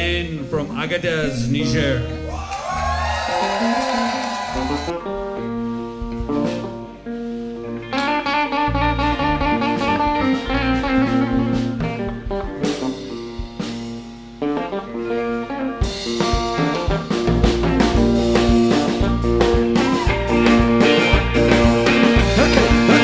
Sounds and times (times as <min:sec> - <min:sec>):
Blues: 0:00.0 - 0:23.0.